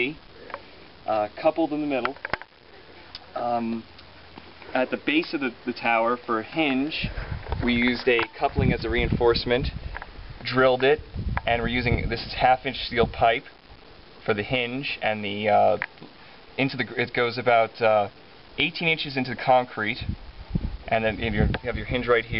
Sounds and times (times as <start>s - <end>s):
Speech: 0.0s - 0.2s, 1.1s - 2.2s, 3.2s - 3.9s, 4.7s - 9.8s, 10.4s - 13.5s, 14.2s - 15.8s, 16.6s - 20.1s, 20.9s - 22.4s.